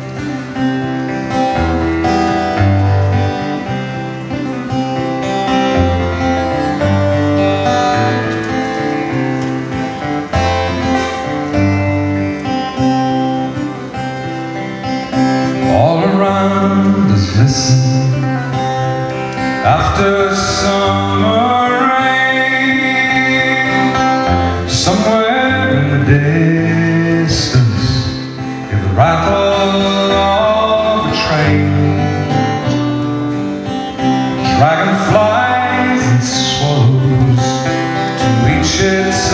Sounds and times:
Music: 0.0s - 39.3s.

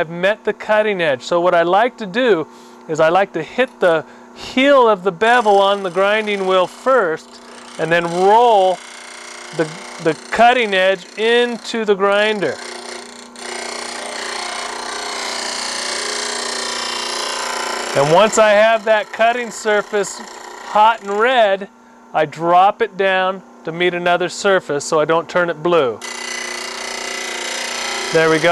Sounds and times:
Speech: 0.0s - 8.8s, 9.6s - 12.6s, 18.0s - 26.0s, 28.1s - 28.5s.

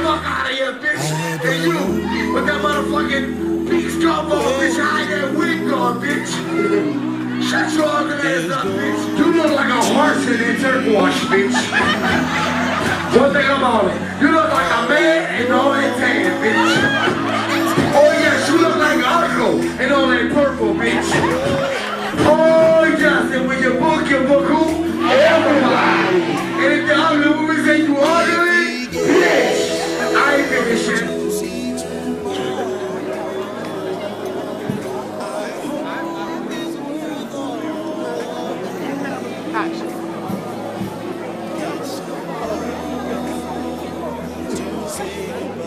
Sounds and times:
Laughter: 11.2s - 14.2s, 16.4s - 18.6s, 20.8s - 22.4s.

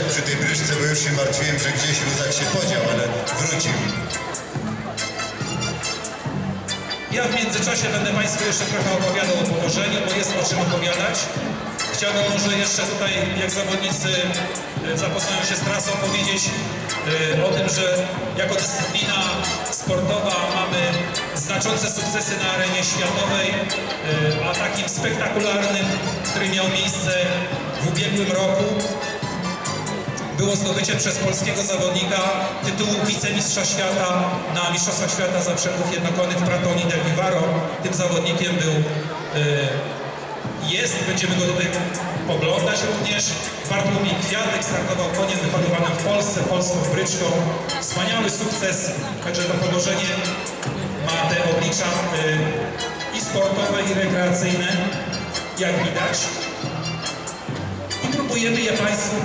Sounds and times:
Speech: 0.0s - 5.6s, 6.7s - 56.9s, 57.9s - 59.2s
Music: 0.0s - 59.2s.

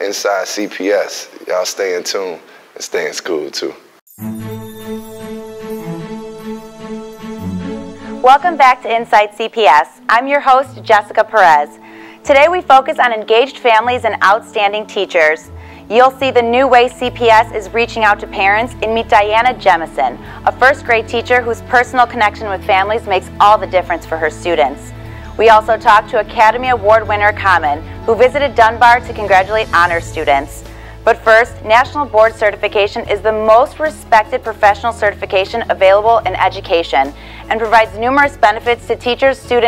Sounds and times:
Speech: 0.0s - 3.8s, 31.1s - 39.6s
Music: 4.1s - 39.6s.

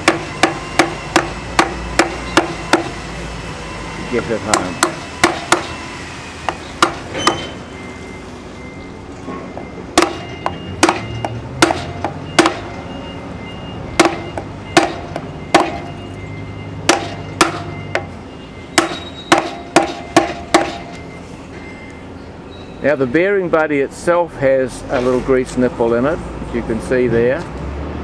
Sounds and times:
Vehicle: 0.0s - 28.0s
Speech: 4.1s - 4.8s, 22.8s - 27.5s.

